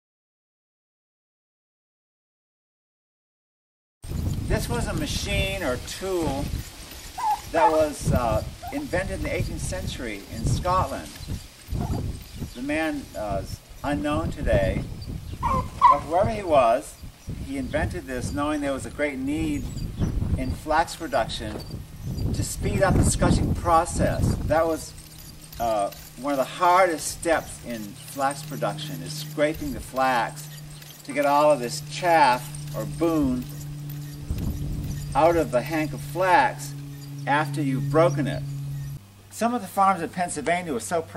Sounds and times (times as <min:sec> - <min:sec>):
Outside, rural or natural: 0:04.0 - 0:41.1
Speech: 0:04.5 - 0:06.5, 0:07.5 - 0:11.2, 0:12.6 - 0:14.8, 0:16.0 - 0:19.7, 0:20.4 - 0:21.6, 0:22.4 - 0:24.9, 0:25.6 - 0:30.5, 0:31.1 - 0:33.5, 0:35.2 - 0:38.4, 0:39.3 - 0:41.1.